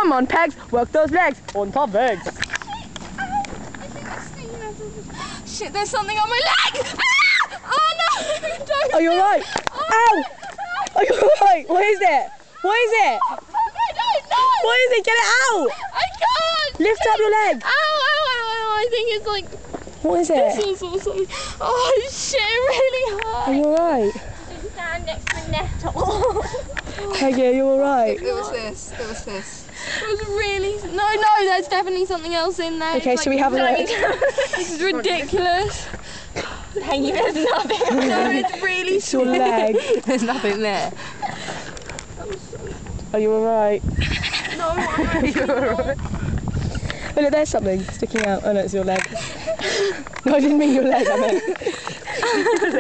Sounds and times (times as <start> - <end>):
Outside, rural or natural: 0.0 - 52.8.